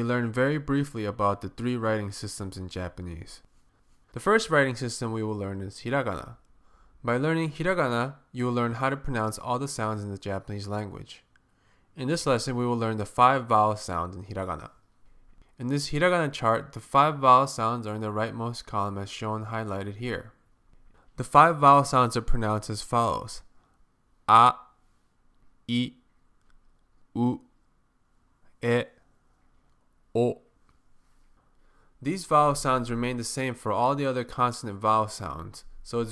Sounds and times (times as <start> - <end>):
Speech: 0.0 - 3.5, 4.1 - 6.4, 7.0 - 11.3, 12.0 - 14.8, 15.6 - 20.4, 21.2 - 23.5, 24.3 - 24.8, 25.7 - 26.0, 27.2 - 27.5, 28.6 - 29.0, 30.1 - 30.5, 32.0 - 36.1.